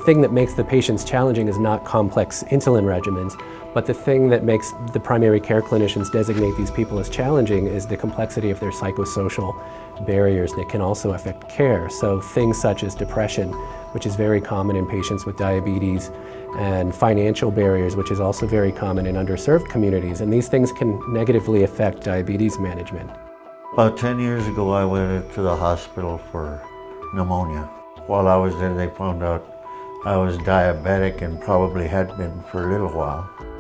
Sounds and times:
Speech: 0.0s - 23.2s, 23.8s - 29.4s, 30.0s - 33.3s
Music: 0.0s - 33.6s.

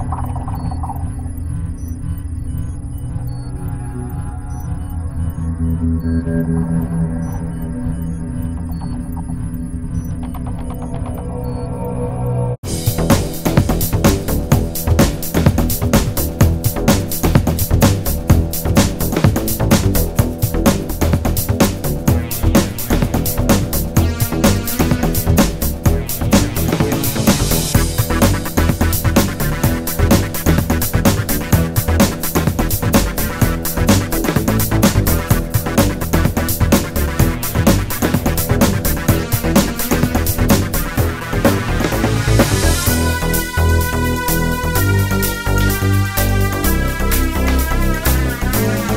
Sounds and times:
Music: 0.0s - 48.9s.

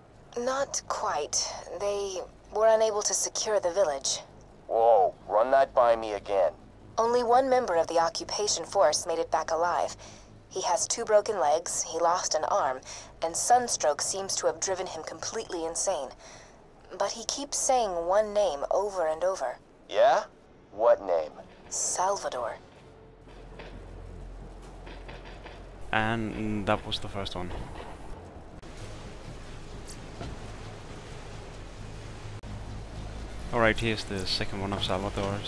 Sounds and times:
Speech: 0.4s - 10.0s, 10.6s - 16.2s, 16.9s - 22.6s, 26.0s - 27.6s, 33.5s - 35.4s.

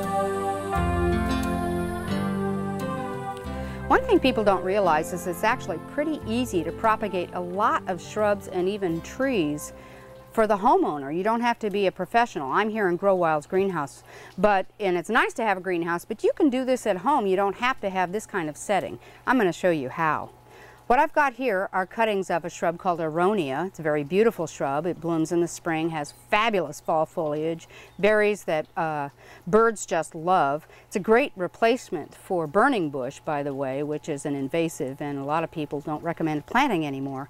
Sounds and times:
Speech: 3.9s - 9.7s, 10.4s - 20.3s, 20.9s - 37.3s.

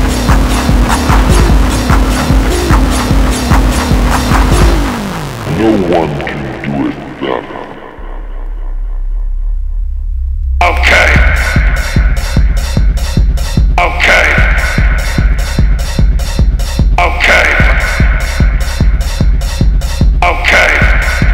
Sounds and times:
Techno: 0.0s - 9.1s, 10.6s - 21.3s.

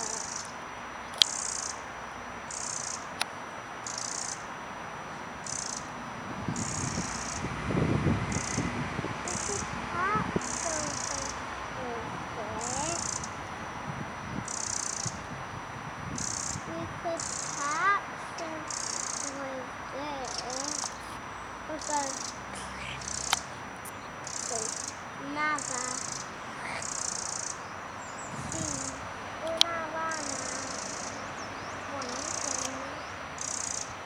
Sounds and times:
Speech: 0.0s - 0.4s, 9.3s - 13.2s, 16.7s - 27.0s, 28.4s - 31.1s, 31.9s - 33.1s.

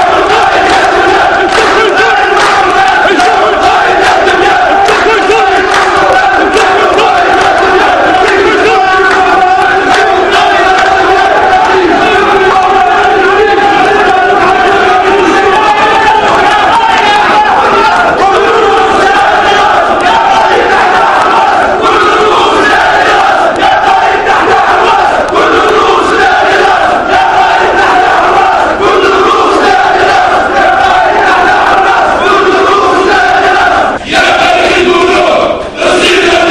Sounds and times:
Speech: 0.0s - 22.8s.

